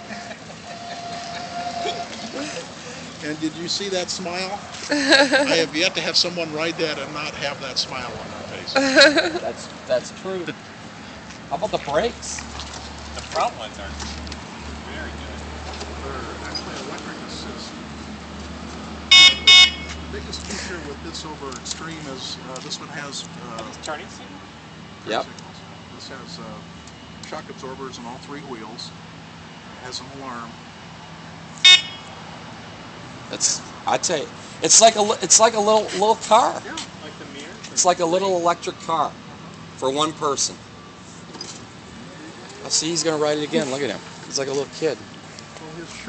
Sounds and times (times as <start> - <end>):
Speech: 11.5 - 12.4, 20.1 - 24.4, 25.0 - 26.6, 27.3 - 29.0, 42.6 - 45.0.